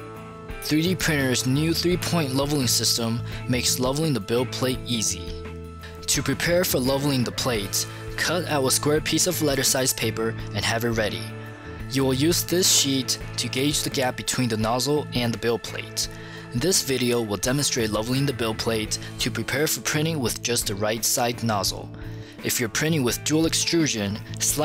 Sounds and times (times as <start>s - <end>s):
Music: 0.0s - 24.6s
Speech: 0.6s - 5.4s, 6.0s - 11.3s, 11.9s - 24.6s.